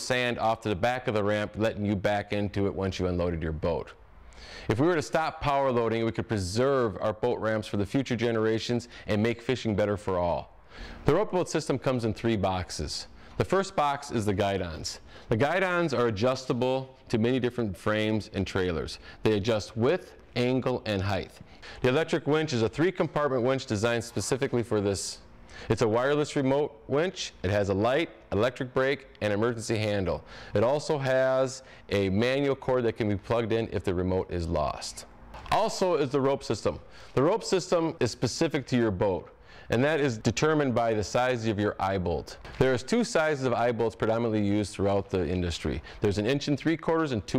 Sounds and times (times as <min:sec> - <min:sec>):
Speech: 0:00.0 - 0:04.0, 0:04.7 - 0:10.5, 0:11.1 - 0:47.3.